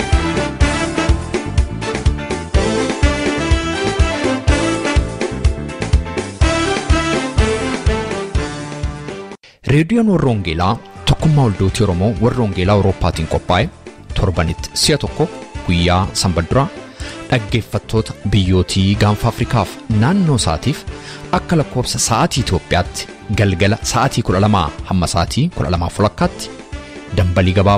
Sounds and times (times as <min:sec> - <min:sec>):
Music: 0:00.0 - 0:27.7
Speech: 0:09.6 - 0:16.7, 0:17.3 - 0:27.7.